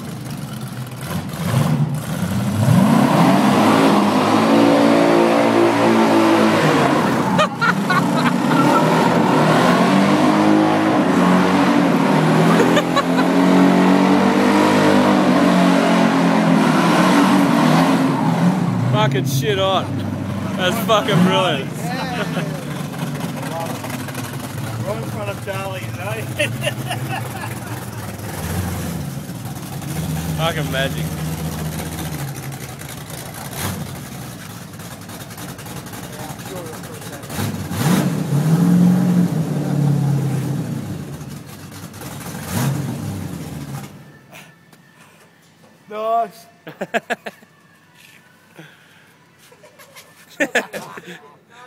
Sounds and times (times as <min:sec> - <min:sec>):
Medium engine (mid frequency): 0:00.0 - 0:46.0
Car: 0:00.0 - 0:49.9.